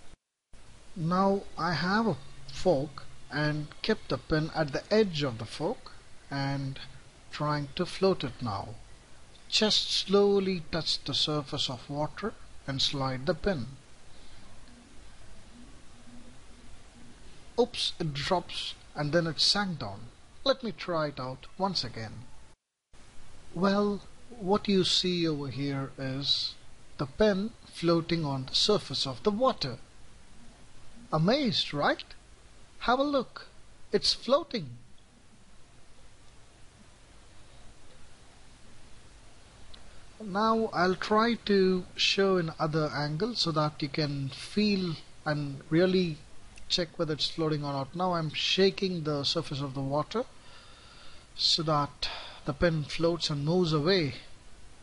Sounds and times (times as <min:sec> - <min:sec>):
Inside, small room: 0:00.0 - 0:54.8
Speech: 0:01.0 - 0:08.8, 0:09.5 - 0:13.8, 0:17.6 - 0:22.3, 0:23.6 - 0:29.9, 0:31.1 - 0:32.2, 0:32.8 - 0:34.8, 0:40.2 - 0:50.3, 0:51.4 - 0:54.3.